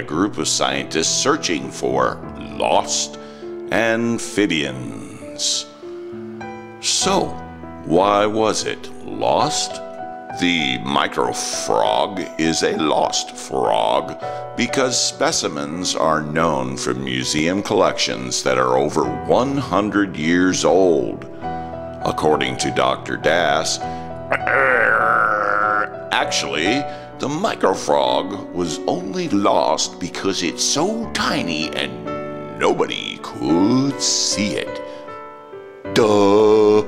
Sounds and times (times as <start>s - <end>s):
Speech: 0.0s - 5.7s, 6.8s - 9.8s, 10.4s - 21.3s, 22.0s - 23.8s, 26.1s - 34.8s, 35.9s - 36.8s
Music: 0.0s - 36.8s.